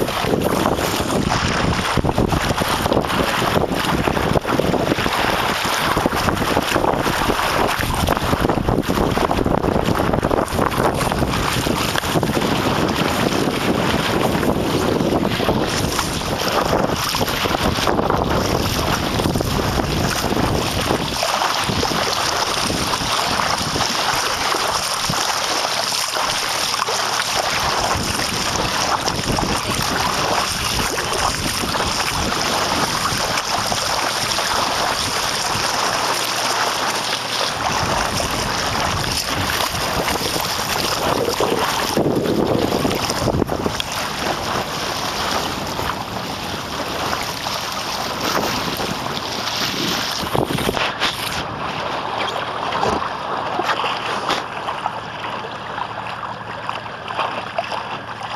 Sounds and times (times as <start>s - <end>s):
Wind noise (microphone): 0.0s - 54.5s
Sailboat, sailing ship: 0.0s - 58.3s.